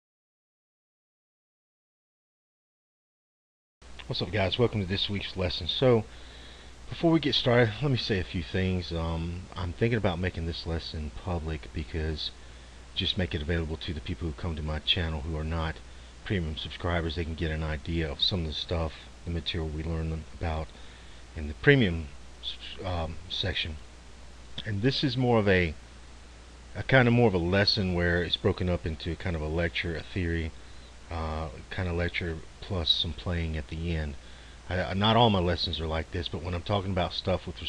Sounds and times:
Speech: 0:04.0 - 0:06.1, 0:06.9 - 0:12.4, 0:13.0 - 0:23.8, 0:24.6 - 0:25.8, 0:26.7 - 0:37.6.

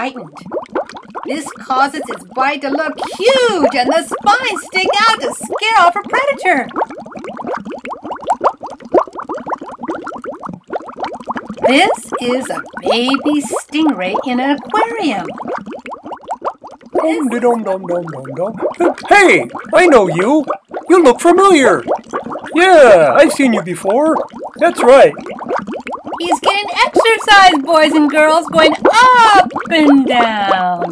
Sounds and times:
Speech: 0:26.2 - 0:30.9.

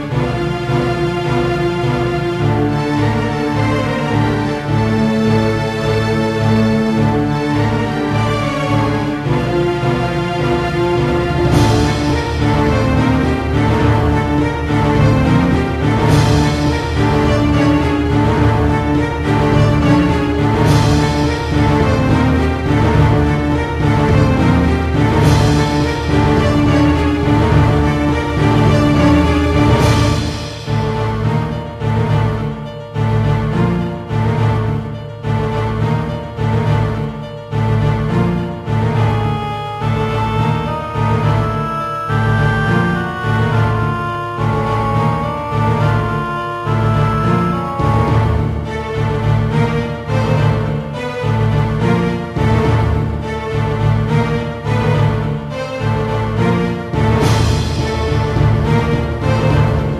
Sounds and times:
Theme music: 0:00.0 - 0:59.9.

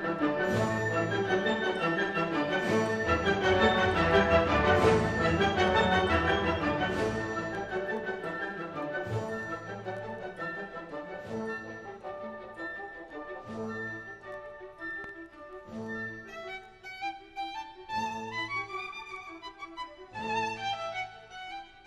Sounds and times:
Violin, fiddle: 0:00.0 - 0:21.8.

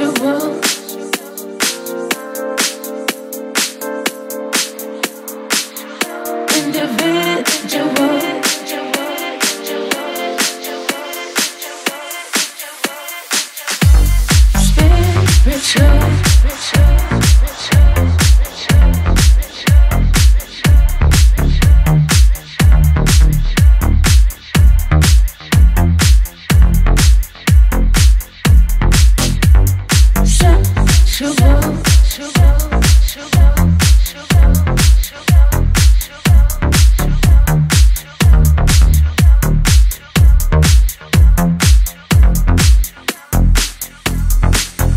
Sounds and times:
Dance music: 0:00.0 - 0:44.9.

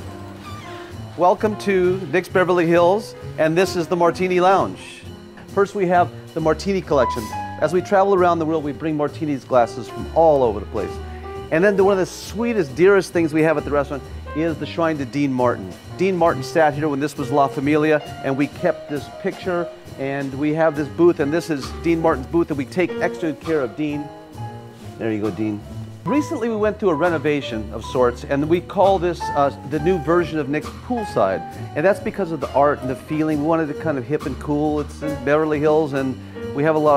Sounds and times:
Music: 0:00.0 - 0:36.9
Speech: 0:01.2 - 0:05.0, 0:05.6 - 0:24.1, 0:25.0 - 0:36.9.

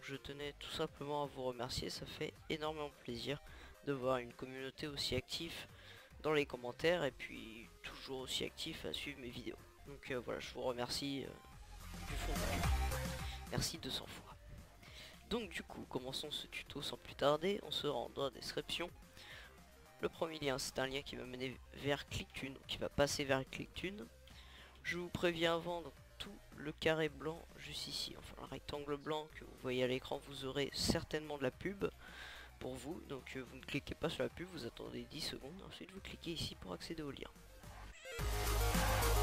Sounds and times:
Speech: 0:00.0 - 0:11.4, 0:12.1 - 0:12.7, 0:13.5 - 0:14.4, 0:15.3 - 0:18.9, 0:20.0 - 0:24.1, 0:24.8 - 0:32.0, 0:32.6 - 0:37.4
Music: 0:00.0 - 0:39.2.

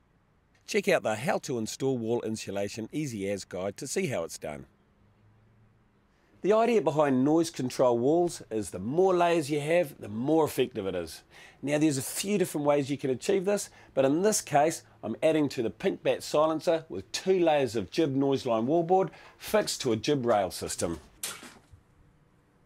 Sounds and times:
Speech: 0:00.7 - 0:04.7, 0:06.4 - 0:21.1.

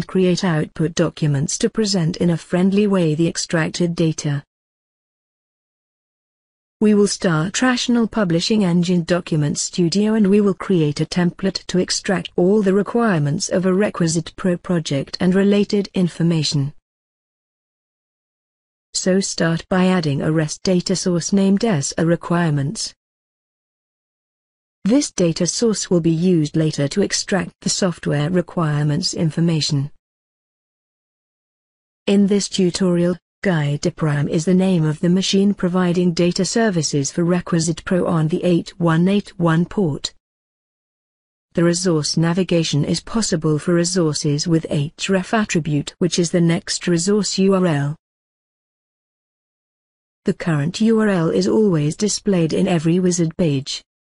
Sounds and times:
Speech: 0:00.0 - 0:04.5, 0:06.8 - 0:16.8, 0:19.0 - 0:23.0, 0:24.9 - 0:30.0, 0:32.1 - 0:40.2, 0:41.6 - 0:48.0, 0:50.3 - 0:53.9.

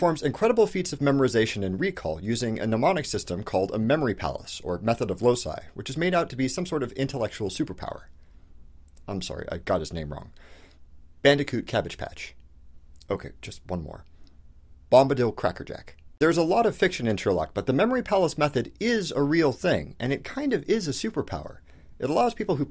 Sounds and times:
Narration, monologue: 0:00.0 - 0:22.7.

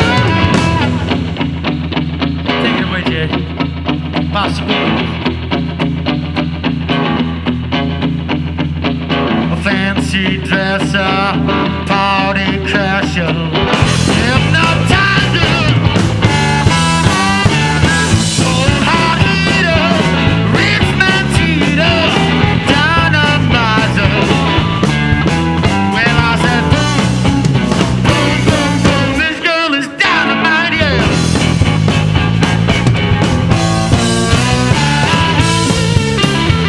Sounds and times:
Blues: 0:00.0 - 0:36.6
Guitar: 0:00.0 - 0:36.6
Psychedelic rock: 0:00.0 - 0:36.6.

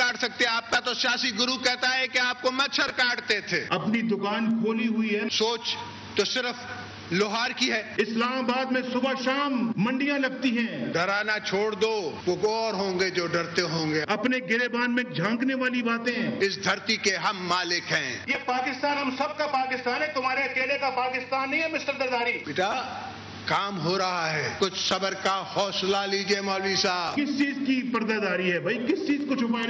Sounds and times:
Male speech, man speaking: 0:00.0 - 0:29.7
Narration, monologue: 0:00.0 - 0:29.7.

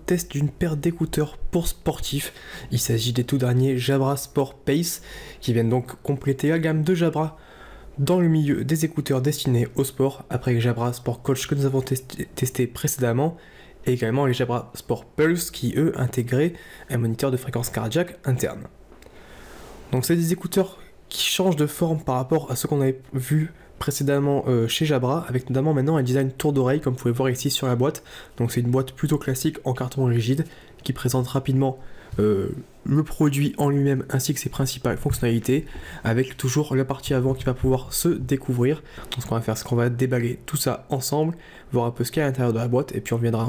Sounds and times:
Speech: 0:00.0 - 0:07.4, 0:08.0 - 0:18.8, 0:19.9 - 0:43.4.

